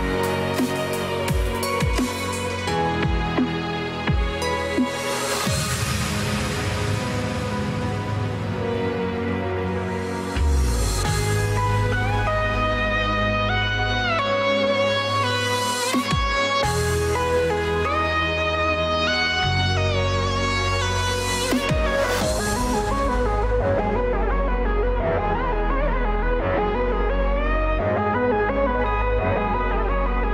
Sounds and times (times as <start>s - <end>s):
Soundtrack music: 0.0s - 30.3s.